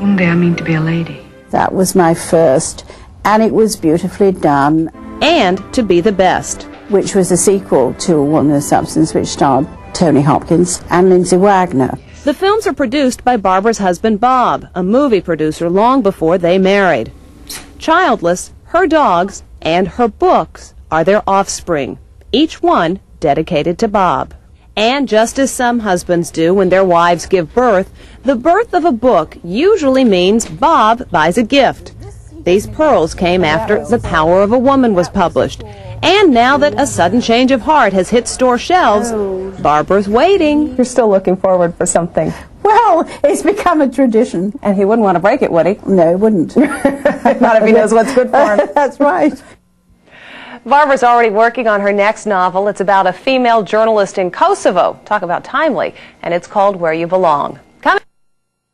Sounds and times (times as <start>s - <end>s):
Speech: 18.0s - 46.6s.